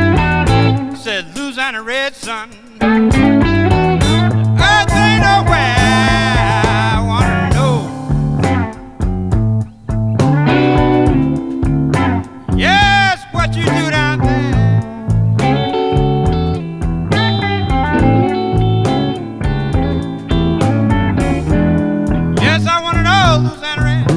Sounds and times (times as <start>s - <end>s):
Bass guitar: 0.0s - 1.1s, 2.8s - 24.1s.